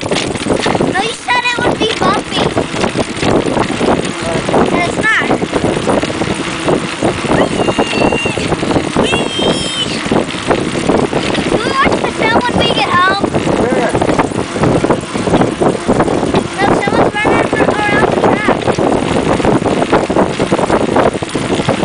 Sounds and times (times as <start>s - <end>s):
Bicycle: 0.0s - 21.8s.